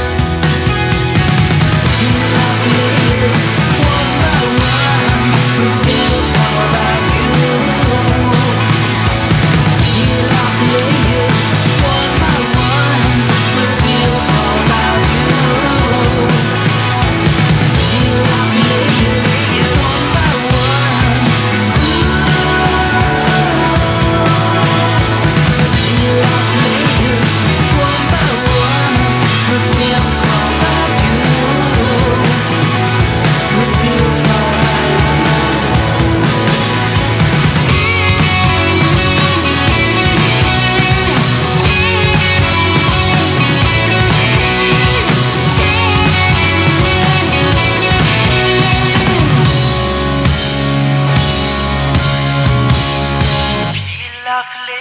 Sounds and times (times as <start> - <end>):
Music: 0.0 - 54.8
Singing: 1.8 - 9.1, 9.8 - 41.1, 53.7 - 54.8.